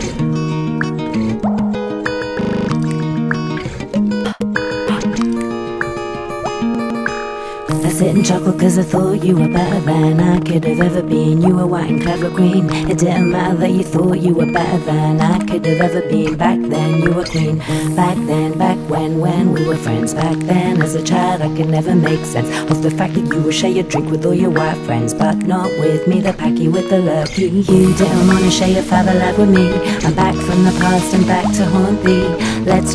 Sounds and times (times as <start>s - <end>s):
Music: 0.0s - 32.9s.